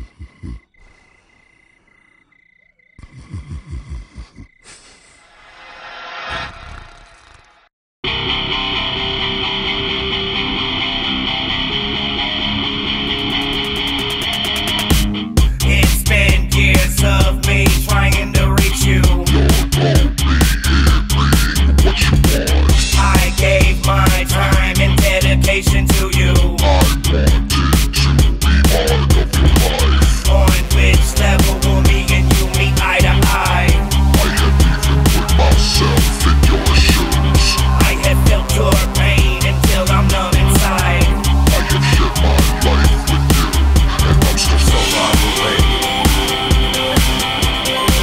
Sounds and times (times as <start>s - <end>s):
Funk: 14.3s - 48.0s.